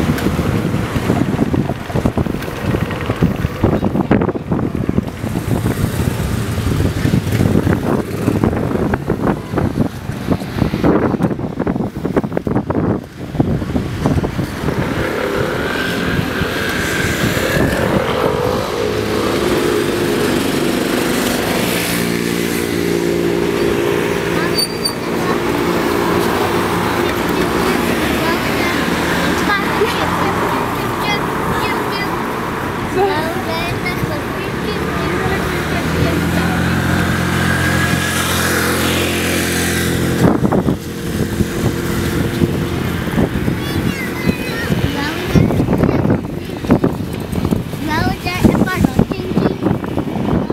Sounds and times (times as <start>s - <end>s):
Motorcycle: 0.0s - 50.5s
Traffic noise, roadway noise: 0.0s - 50.5s.